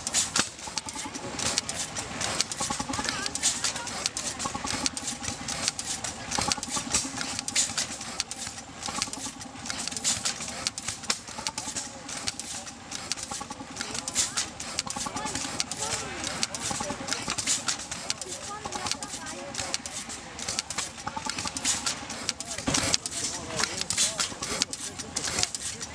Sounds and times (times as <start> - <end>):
Engine: 0.0 - 25.9
Speech: 0.6 - 5.0, 11.4 - 25.9.